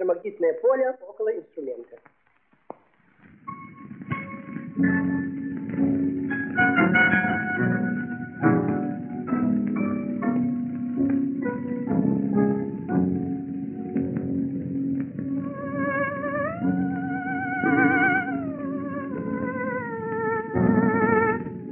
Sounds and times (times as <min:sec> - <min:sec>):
Theremin: 0:14.4 - 0:21.7.